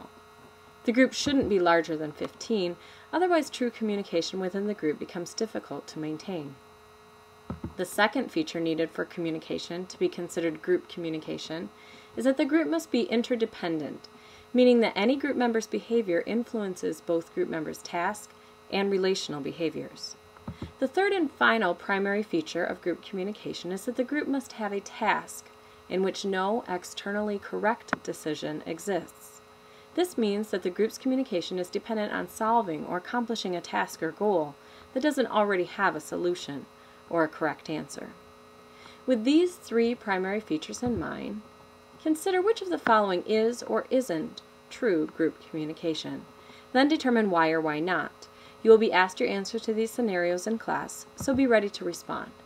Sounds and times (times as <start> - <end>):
Narration, monologue: 0.0 - 52.4
Female speech, woman speaking: 0.9 - 6.6, 7.8 - 20.2, 20.8 - 29.4, 30.0 - 38.2, 39.1 - 52.4.